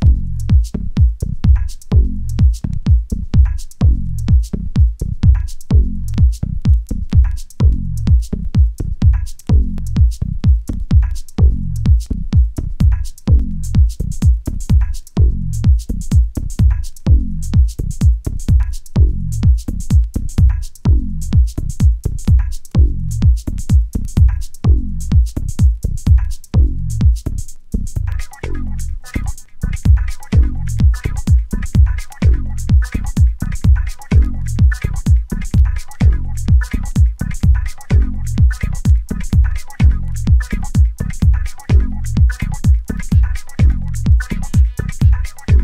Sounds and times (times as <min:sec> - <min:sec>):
Music: 0:00.0 - 0:45.6.